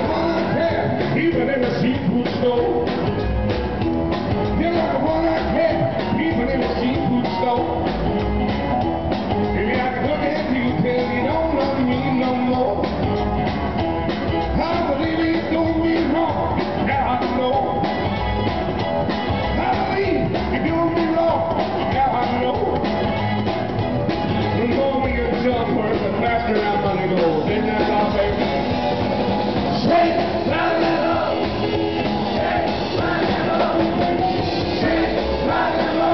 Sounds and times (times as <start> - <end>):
Rock music: 0.0 - 36.1
Singing: 29.8 - 36.1.